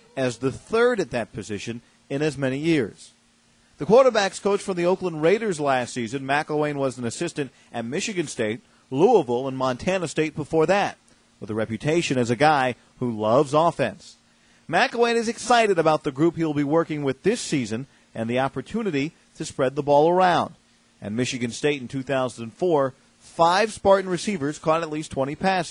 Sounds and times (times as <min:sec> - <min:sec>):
Speech: 0:00.2 - 0:03.2, 0:03.8 - 0:25.7.